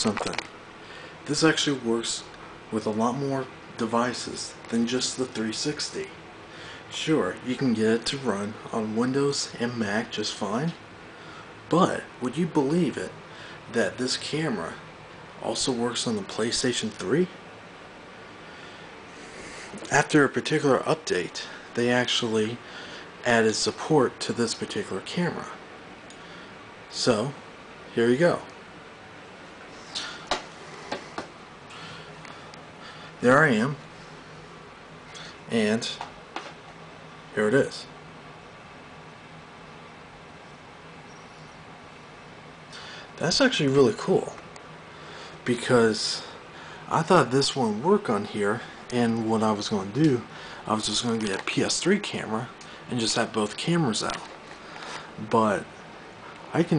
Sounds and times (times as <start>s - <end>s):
Speech: 0.0s - 0.4s, 1.3s - 6.2s, 6.9s - 10.8s, 11.7s - 14.8s, 15.4s - 17.4s, 19.8s - 22.6s, 23.2s - 25.6s, 26.9s - 28.6s, 33.2s - 33.8s, 35.5s - 36.1s, 37.3s - 38.0s, 43.2s - 44.4s, 45.4s - 54.3s, 55.2s - 55.7s, 56.5s - 56.7s.